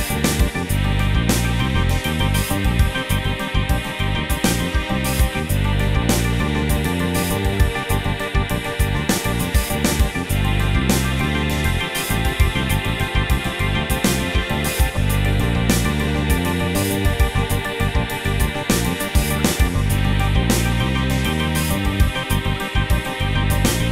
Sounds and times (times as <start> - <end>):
Music: 0.0 - 23.9.